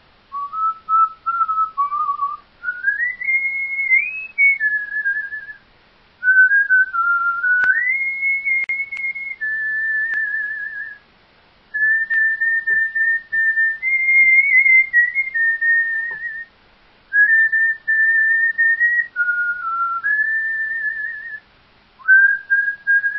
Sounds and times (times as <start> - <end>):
Whistling: 0.3 - 5.6, 6.2 - 11.0, 11.8 - 16.5, 17.1 - 21.4, 22.0 - 23.1.